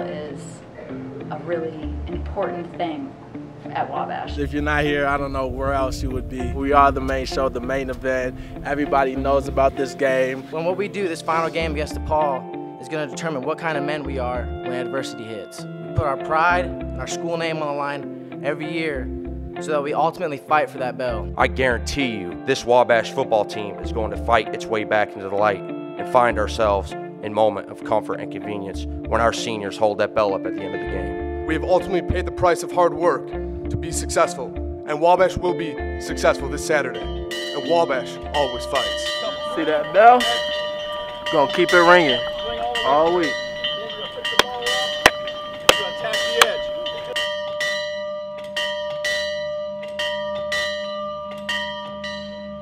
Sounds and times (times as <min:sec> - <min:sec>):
Music: 0:00.0 - 0:52.6
Speech: 0:03.8 - 0:19.0, 0:19.6 - 0:37.0, 0:37.6 - 0:40.4, 0:41.3 - 0:45.0, 0:45.7 - 0:47.1.